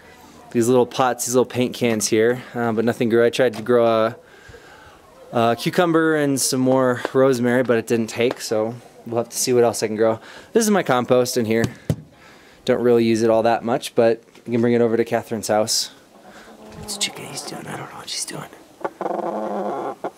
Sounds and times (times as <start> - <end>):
Outside, urban or manmade: 0.0 - 20.1
Speech: 0.4 - 4.2, 5.3 - 11.7, 12.7 - 16.0, 16.8 - 18.6
Chicken, rooster: 4.7 - 6.0, 16.1 - 17.6, 18.8 - 20.1.